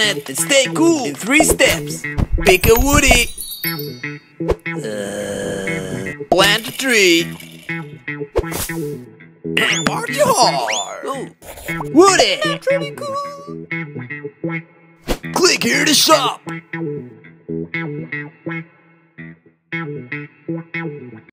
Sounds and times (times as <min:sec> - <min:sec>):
Speech: 0:00.0 - 0:03.3, 0:06.3 - 0:07.4, 0:09.6 - 0:13.6, 0:15.3 - 0:16.5
Music: 0:00.0 - 0:21.3.